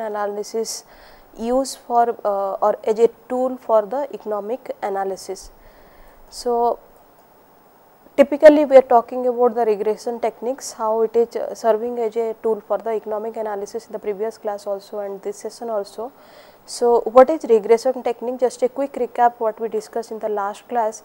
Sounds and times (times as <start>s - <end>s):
Speech: 0.0s - 5.5s, 6.3s - 6.8s, 8.2s - 16.1s, 16.7s - 21.0s.